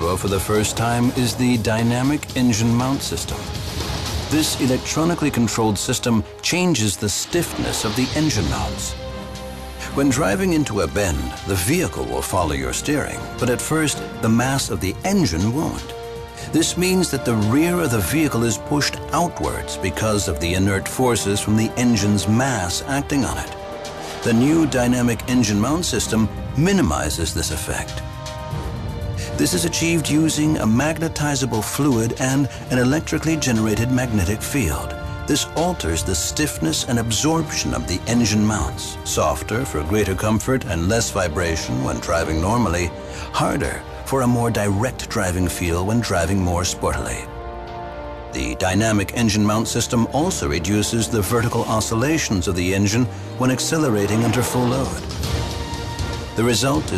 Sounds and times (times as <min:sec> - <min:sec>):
Speech: 0:00.0 - 0:03.5, 0:04.3 - 0:09.0, 0:09.8 - 0:23.6, 0:24.2 - 0:28.0, 0:29.2 - 0:47.3, 0:48.3 - 0:55.1, 0:56.4 - 0:56.9
Music: 0:00.0 - 0:56.9.